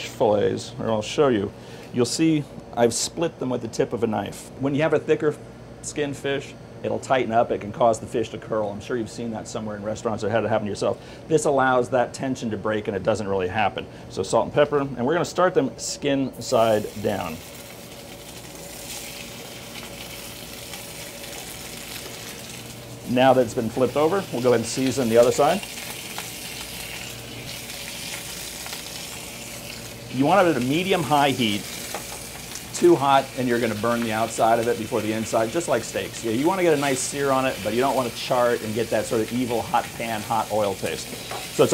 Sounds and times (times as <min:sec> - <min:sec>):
Speech: 0:00.0 - 0:17.4, 0:23.1 - 0:25.7, 0:30.1 - 0:31.7, 0:32.7 - 0:41.7.